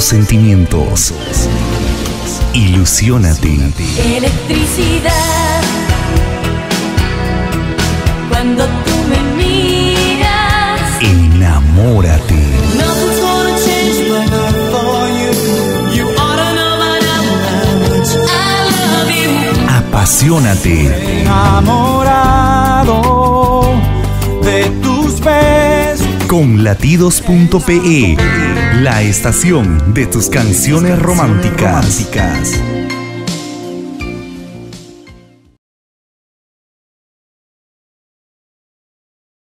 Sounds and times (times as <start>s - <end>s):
Speech: 0.0s - 1.5s, 2.3s - 4.2s, 11.0s - 12.8s, 19.6s - 21.8s, 26.2s - 32.7s
Music: 0.0s - 35.6s.